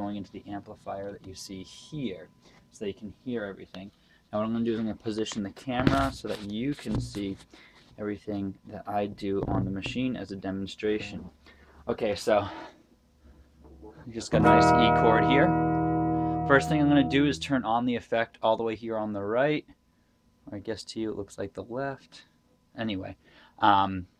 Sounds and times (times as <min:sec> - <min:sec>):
Speech: 0:00.0 - 0:12.7, 0:14.0 - 0:15.5, 0:16.5 - 0:19.7, 0:20.4 - 0:24.1
Chorus effect: 0:14.4 - 0:17.6
Sampler: 0:14.4 - 0:17.6.